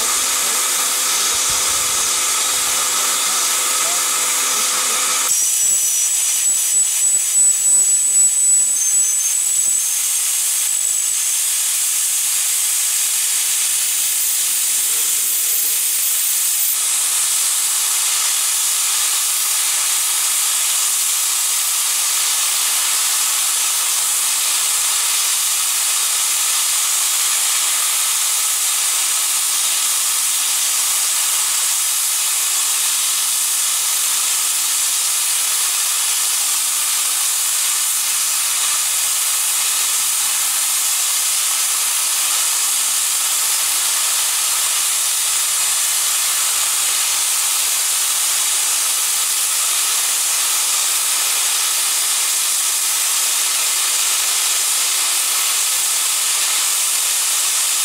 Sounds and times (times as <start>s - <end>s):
Hiss: 0.0s - 57.8s.